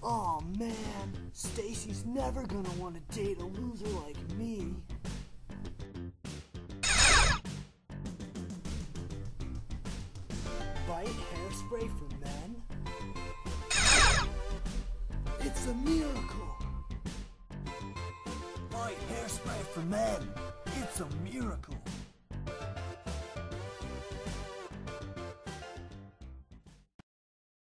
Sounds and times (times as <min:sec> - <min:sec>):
Speech: 0:00.0 - 0:04.8, 0:10.8 - 0:12.6, 0:15.4 - 0:16.6, 0:18.7 - 0:21.9
Music: 0:00.0 - 0:26.9.